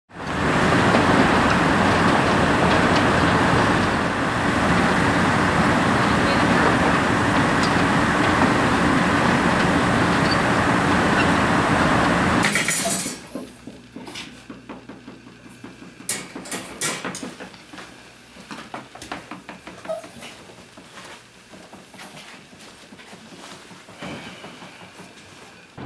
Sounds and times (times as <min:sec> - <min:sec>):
Speech: 0:06.0 - 0:07.0.